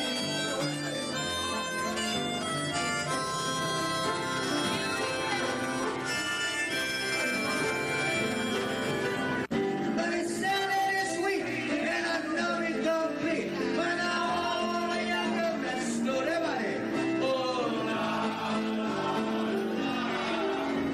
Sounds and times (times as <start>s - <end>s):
Male singing: 9.8s - 20.9s
Choir: 17.2s - 20.9s.